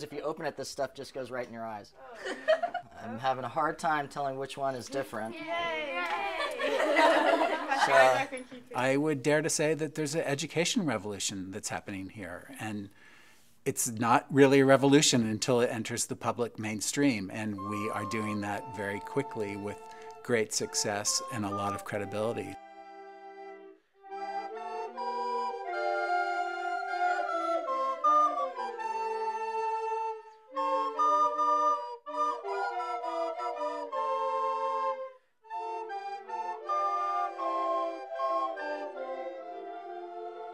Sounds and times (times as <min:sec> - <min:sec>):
Flute: 0:17.1 - 0:40.5.